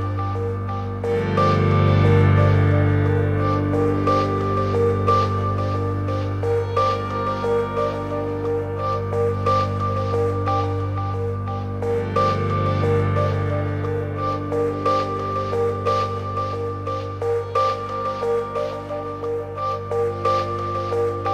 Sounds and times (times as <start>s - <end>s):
Music: 0.0s - 21.3s.